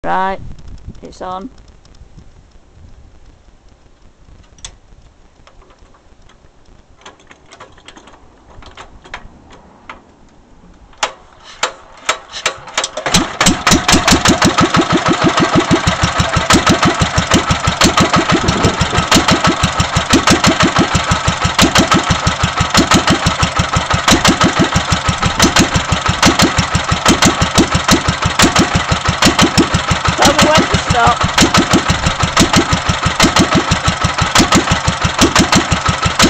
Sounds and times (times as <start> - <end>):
Speech: 0.0 - 0.4, 1.0 - 1.6, 30.2 - 31.2.